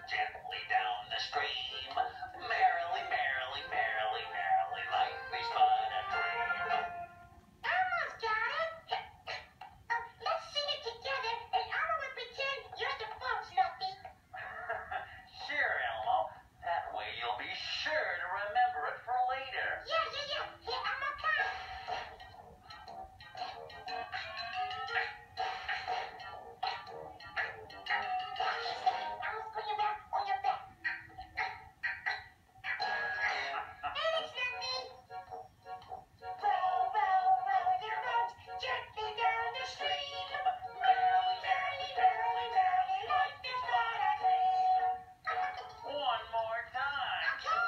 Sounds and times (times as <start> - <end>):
Speech: 0.0 - 6.4, 7.6 - 9.2, 9.9 - 21.6, 27.4 - 30.8, 45.3 - 47.6
Music: 0.0 - 8.3, 19.6 - 47.6.